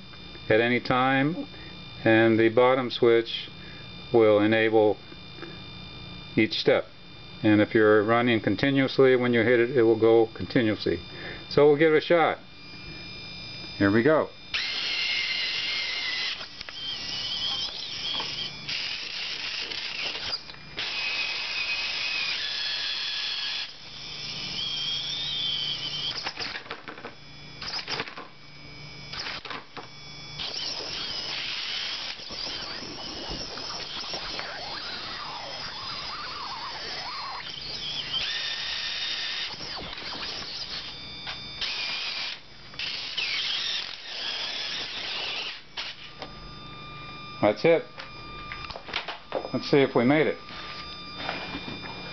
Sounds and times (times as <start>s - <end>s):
Inside, small room: 0.0s - 52.1s
Speech: 0.5s - 3.5s, 4.1s - 5.0s, 6.4s - 12.4s, 13.8s - 14.4s, 47.4s - 47.9s, 49.5s - 50.4s.